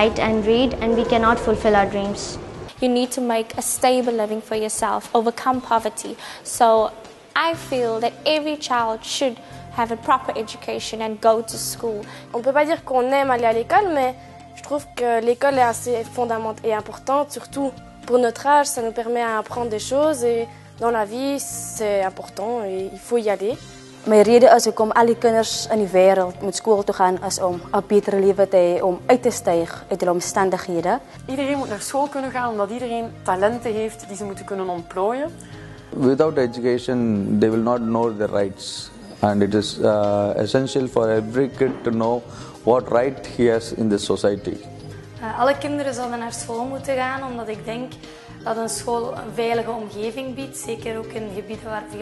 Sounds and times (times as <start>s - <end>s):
Music: 0.0s - 52.0s.